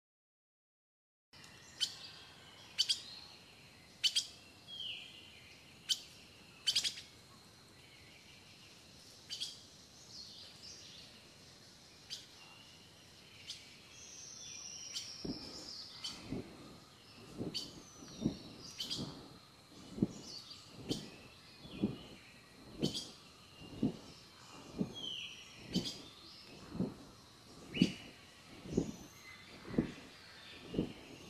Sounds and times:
Chirp, tweet: 1.4 - 31.3.

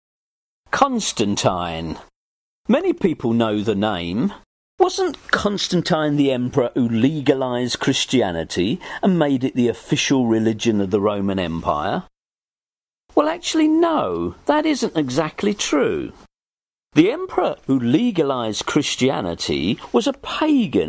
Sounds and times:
Speech: 0.7 - 2.1, 2.7 - 12.1, 13.1 - 16.3, 16.9 - 20.8.

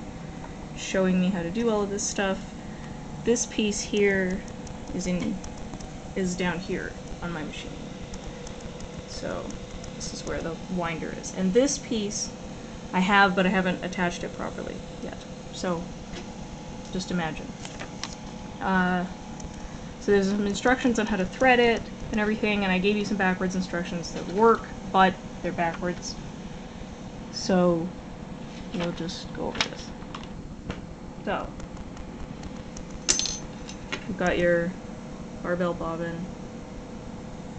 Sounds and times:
Speech: 0.8 - 2.4, 3.3 - 5.4, 6.2 - 7.8, 9.1 - 12.3, 12.9 - 15.9, 16.9 - 17.6, 18.6 - 19.1, 20.0 - 26.2, 27.3 - 28.0, 28.8 - 30.0, 31.2 - 31.6, 34.1 - 34.8, 35.4 - 36.3.

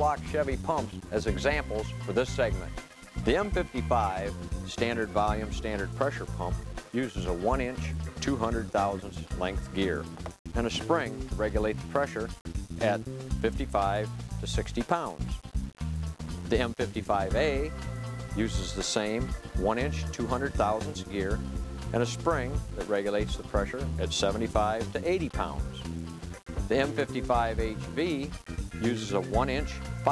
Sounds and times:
Speech: 0.0 - 15.4, 16.5 - 17.7, 18.4 - 25.8, 26.7 - 30.1
Music: 0.0 - 30.1.

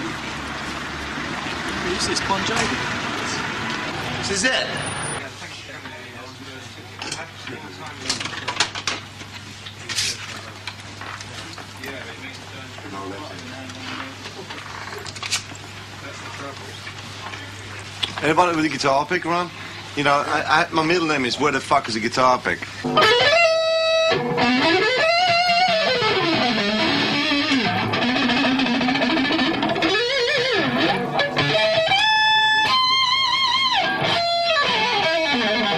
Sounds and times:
Speech: 1.7 - 3.4, 4.2 - 8.6, 11.3 - 14.6, 16.0 - 22.7.

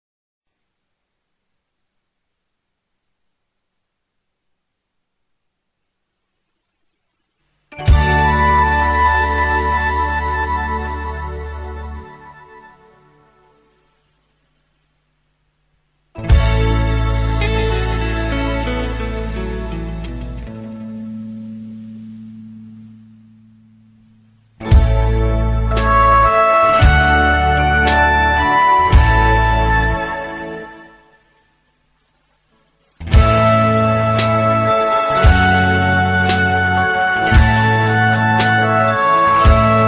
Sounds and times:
Soul music: 7.8 - 13.7, 16.2 - 31.2, 33.0 - 39.8.

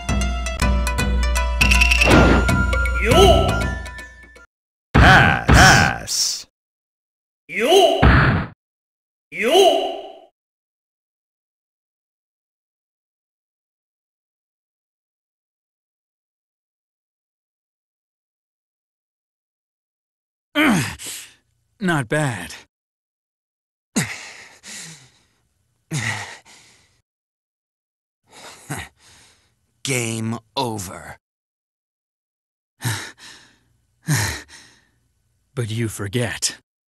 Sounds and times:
Music: 0.0 - 4.5
Speech: 5.0 - 6.5, 7.5 - 8.0, 9.4 - 10.0, 21.8 - 22.6, 29.8 - 31.2, 35.6 - 36.6.

